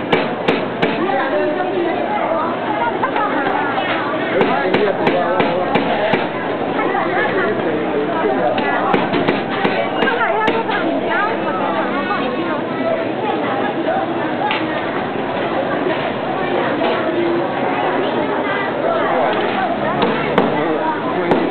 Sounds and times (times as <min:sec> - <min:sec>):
Speech: 0:00.8 - 0:21.5.